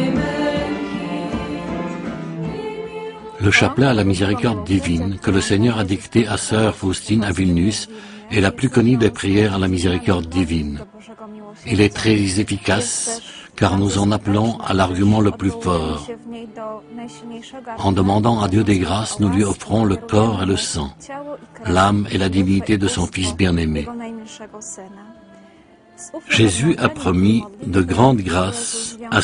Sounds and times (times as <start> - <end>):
Music: 0.0 - 29.2
Speech: 3.4 - 25.1, 26.0 - 29.2.